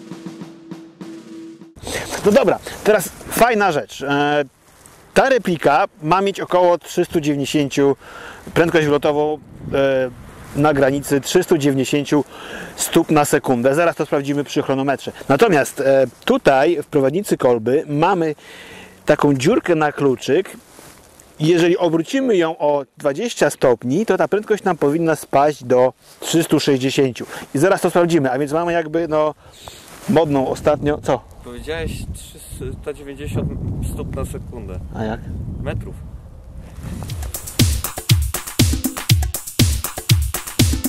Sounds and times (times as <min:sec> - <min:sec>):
Speech: 0:02.0 - 0:04.5, 0:05.2 - 0:18.4, 0:19.1 - 0:20.6, 0:21.4 - 0:29.4, 0:30.1 - 0:36.0.